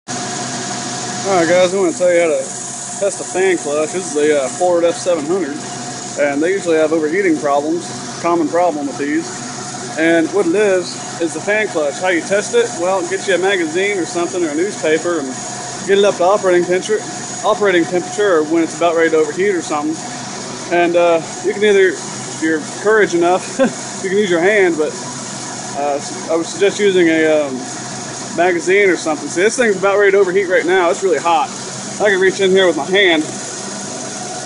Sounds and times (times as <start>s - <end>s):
Outside, urban or manmade: 0.1s - 3.4s, 4.4s - 14.3s, 14.9s - 26.6s, 29.1s - 34.4s
Speech: 1.2s - 5.6s, 6.2s - 9.3s, 10.0s - 20.0s, 20.7s - 25.0s, 25.7s - 27.7s, 28.3s - 33.3s.